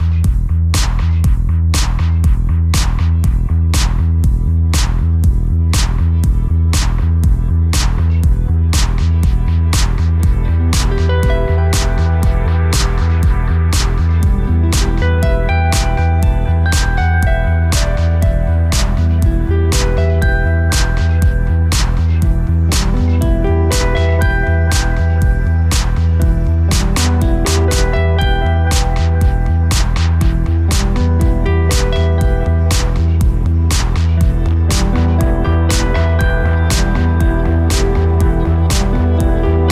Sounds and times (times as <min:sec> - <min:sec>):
Techno: 0:00.0 - 0:39.7.